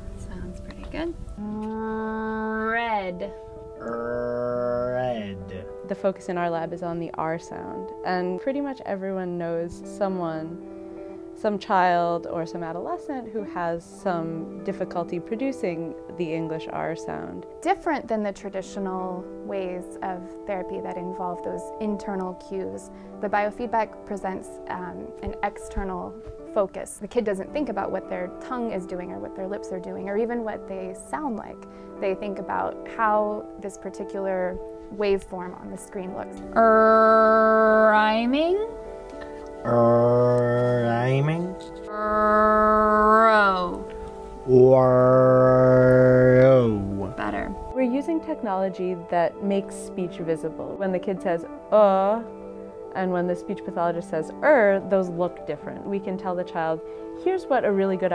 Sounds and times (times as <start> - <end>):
Female speech, woman speaking: 0.0 - 1.2, 2.8 - 3.3, 5.9 - 10.6, 11.4 - 36.4, 37.9 - 38.7, 43.2 - 43.8, 47.2 - 52.3, 52.9 - 58.1
Narration, monologue: 0.0 - 42.5, 43.1 - 58.1
Music: 0.0 - 58.1.